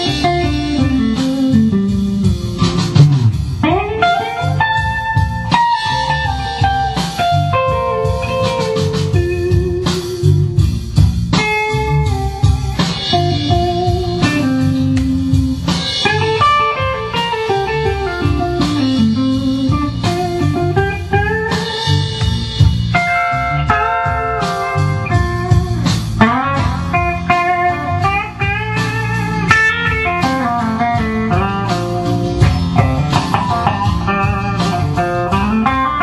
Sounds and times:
Guitar: 0.0 - 36.0
Inside, small room: 0.0 - 36.0.

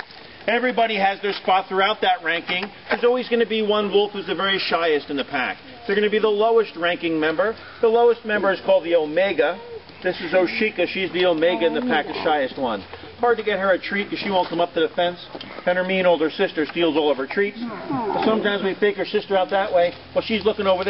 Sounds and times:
Speech: 0.5 - 20.9
Animal: 9.4 - 13.1, 16.9 - 18.8.

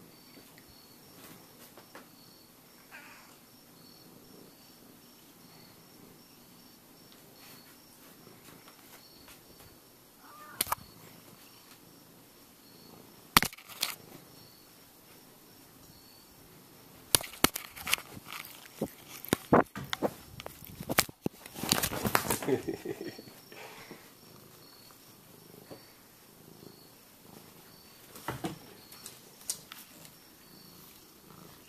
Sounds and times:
Inside, small room: 0.0 - 31.6
Animal: 2.8 - 4.8, 8.6 - 11.8.

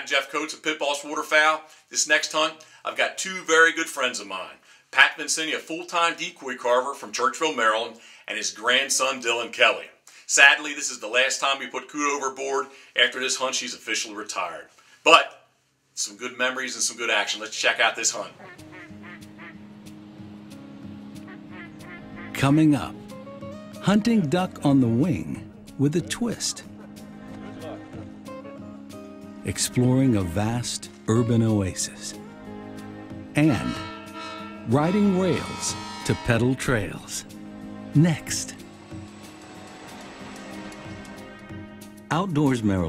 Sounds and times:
Speech: 0.0 - 15.4, 16.0 - 18.4, 22.4 - 23.0, 23.8 - 26.6, 29.5 - 32.2, 33.4 - 33.8, 34.7 - 37.3, 38.0 - 38.6, 42.1 - 42.8
Music: 18.2 - 42.8
Quack: 18.4 - 19.6, 21.3 - 22.4.

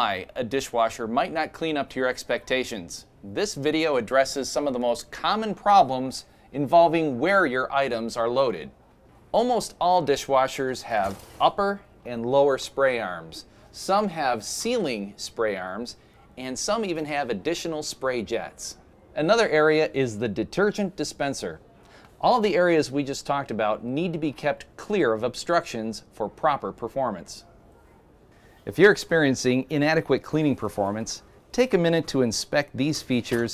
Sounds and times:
Speech: 0.0 - 21.6, 22.2 - 28.0, 28.6 - 33.5.

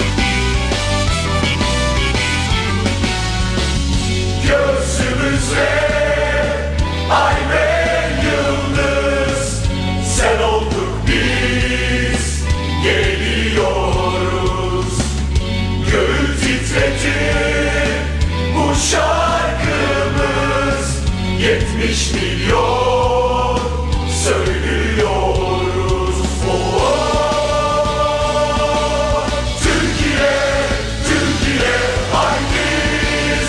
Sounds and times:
Music: 0.0 - 33.4.

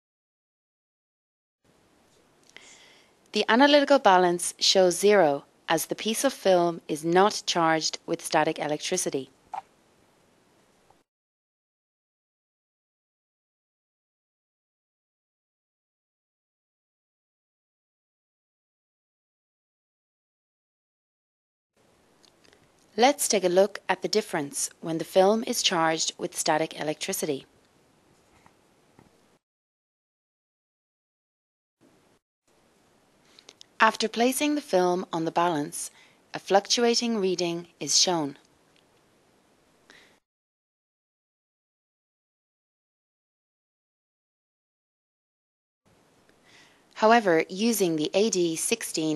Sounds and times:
Speech: 3.4 - 9.4, 23.0 - 27.5, 33.8 - 38.4, 47.0 - 49.1.

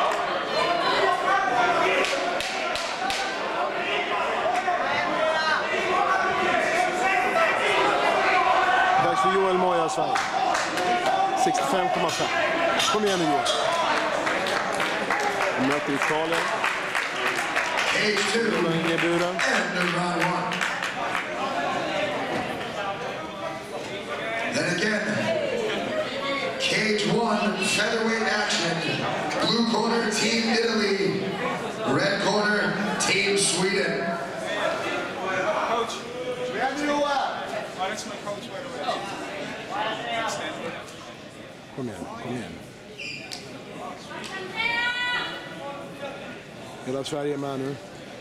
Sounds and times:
Inside, large room or hall: 0.0 - 48.2.

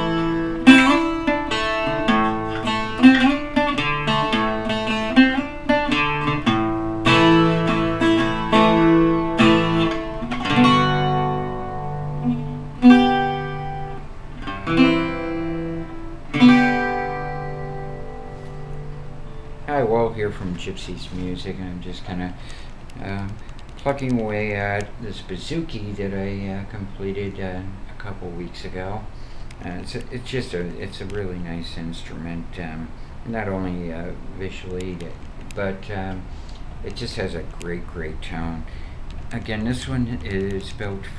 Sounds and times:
Acoustic guitar: 0.0 - 24.8
Mandolin: 0.0 - 28.9
Strum: 0.0 - 41.1.

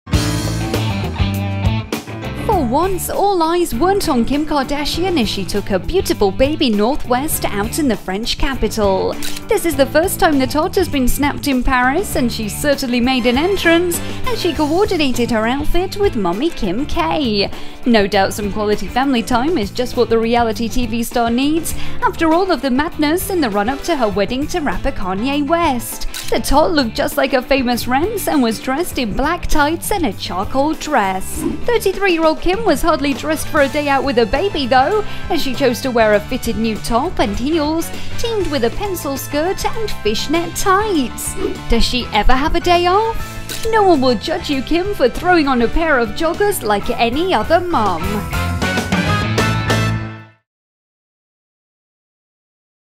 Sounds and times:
Music: 0.1 - 50.5
Speech: 2.4 - 48.3.

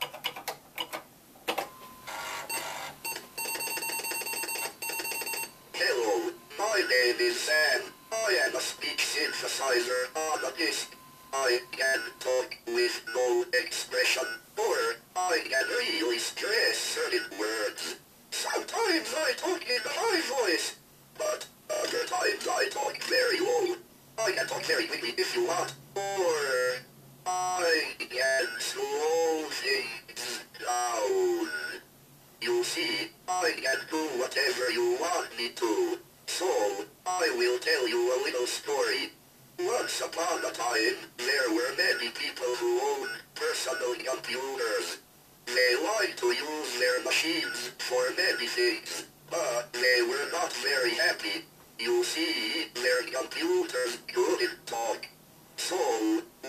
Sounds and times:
Speech synthesizer: 5.8 - 31.8, 32.4 - 56.4.

